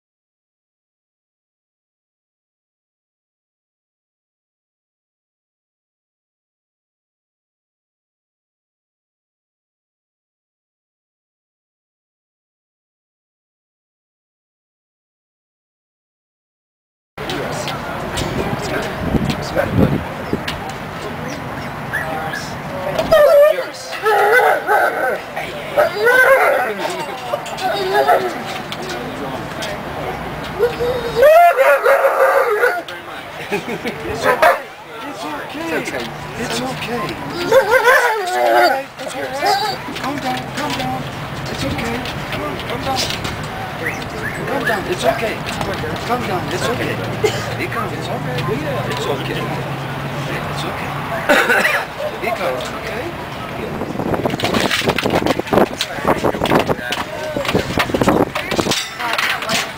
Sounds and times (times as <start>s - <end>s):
Speech: 17.2s - 31.6s, 32.3s - 54.0s, 55.2s - 59.7s
Dog: 25.8s - 27.0s, 27.6s - 28.5s, 37.4s - 39.8s.